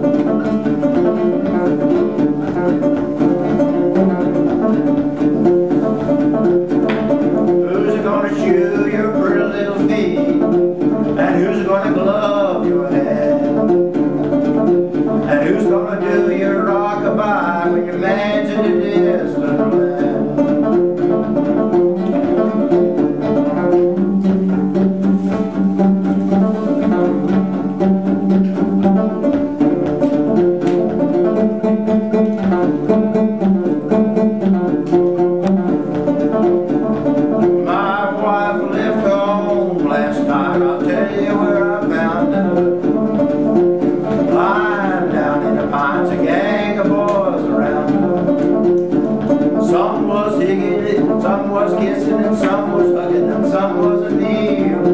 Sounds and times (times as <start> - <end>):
Banjo: 0.0 - 54.9.